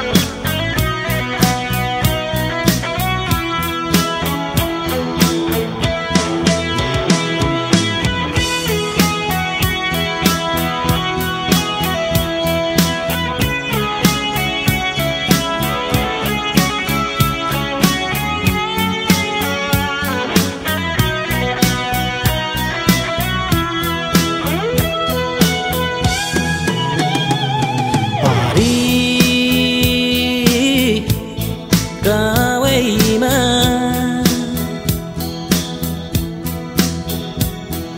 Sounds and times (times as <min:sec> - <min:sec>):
Music: 0:00.0 - 0:37.9.